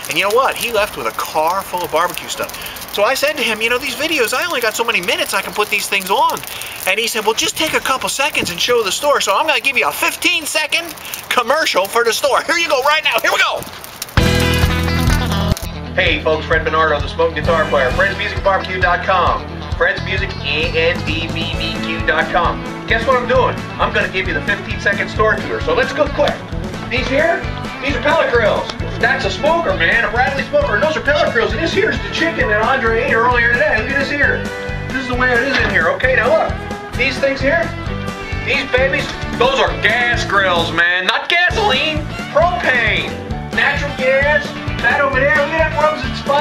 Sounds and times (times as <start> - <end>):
Music: 0.0 - 10.4, 14.2 - 46.4
Speech: 0.0 - 13.6, 16.0 - 37.7, 38.5 - 46.4.